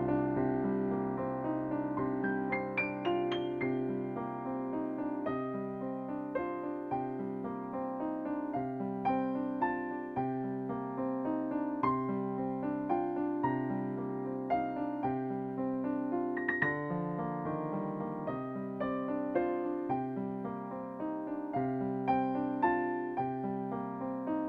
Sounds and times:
Electric piano: 0:00.0 - 0:24.4.

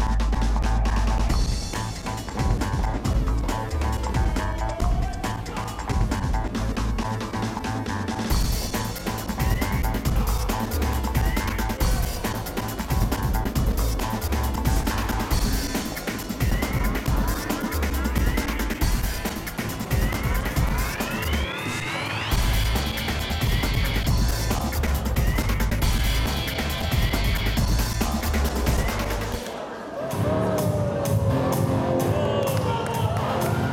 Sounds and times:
Music: 0:00.0 - 0:33.7.

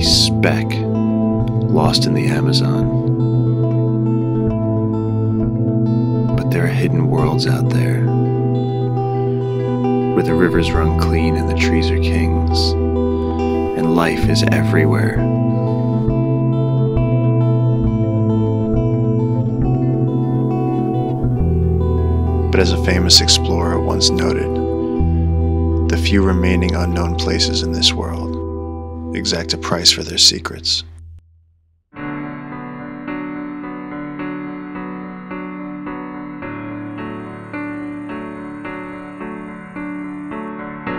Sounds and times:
Speech: 0:00.0 - 0:00.9, 0:01.6 - 0:03.0, 0:06.4 - 0:08.1, 0:09.6 - 0:12.8, 0:13.7 - 0:15.3, 0:22.5 - 0:24.6, 0:25.9 - 0:28.4, 0:29.2 - 0:30.9
Music: 0:00.0 - 0:31.3, 0:31.9 - 0:40.9.

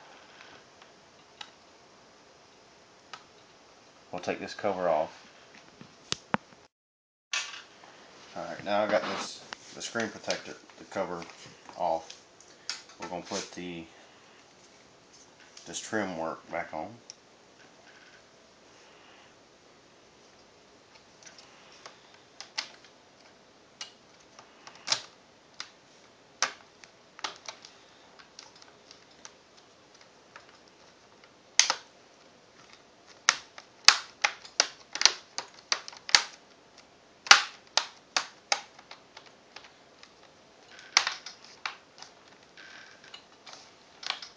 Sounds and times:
Inside, small room: 0:07.3 - 0:44.3.

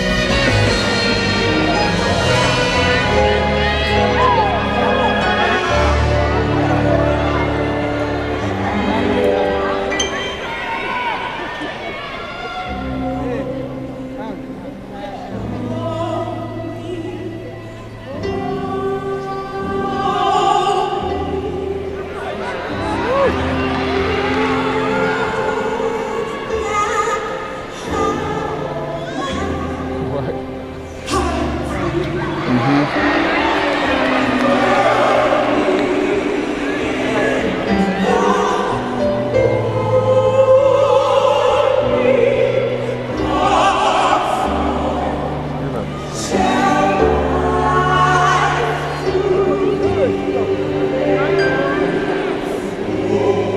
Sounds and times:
Music: 0:00.0 - 0:53.5.

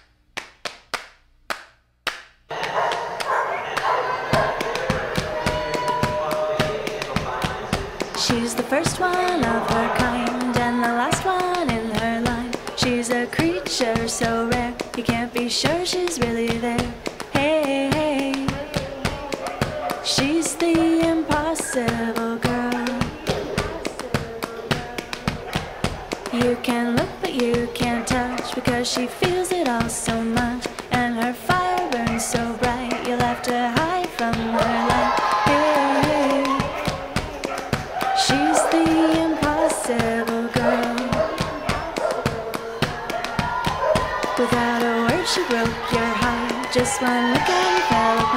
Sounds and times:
Music: 0:03.6 - 0:48.3.

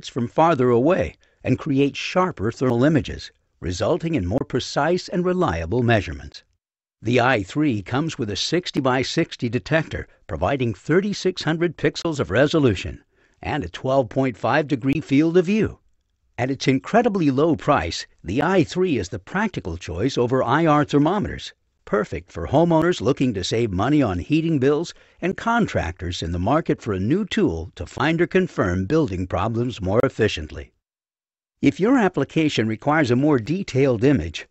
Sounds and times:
Speech: 0:00.0 - 0:15.8, 0:16.4 - 0:30.8, 0:31.6 - 0:34.5.

